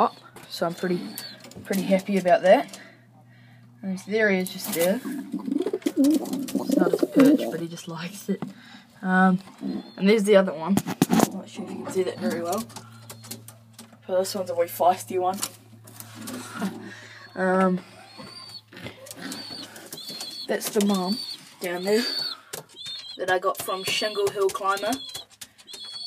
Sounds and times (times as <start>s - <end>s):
Coo: 5.1s - 7.6s
Speech: 10.0s - 12.7s, 14.1s - 15.4s, 20.5s - 22.1s, 23.2s - 25.0s.